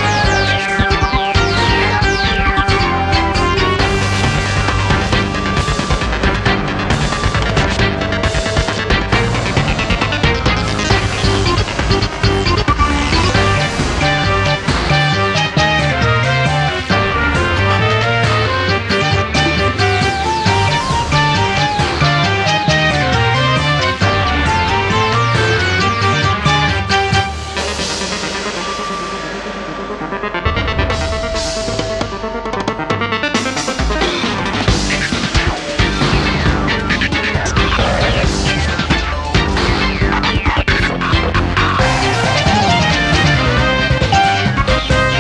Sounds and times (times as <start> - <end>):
Music: 0.0 - 45.2.